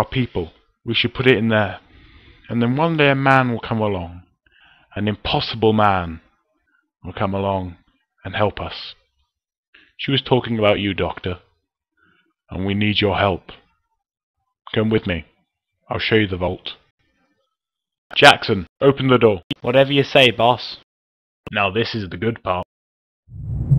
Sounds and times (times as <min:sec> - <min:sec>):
Narration, monologue: 0:00.0 - 0:13.8, 0:14.4 - 0:22.7.